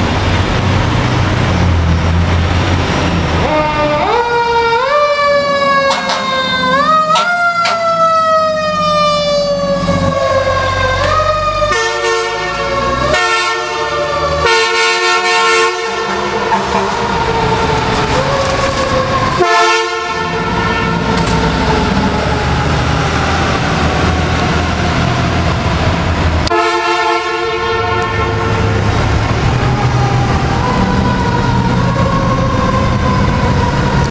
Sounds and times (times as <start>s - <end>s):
Vehicle: 0.0s - 34.1s.